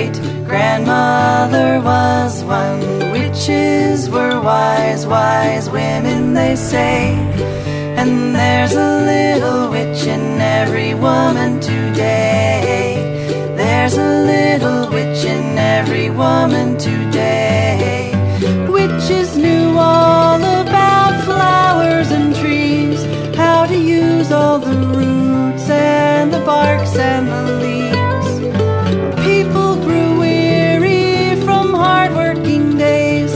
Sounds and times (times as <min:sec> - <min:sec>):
Music: 0:00.0 - 0:33.3.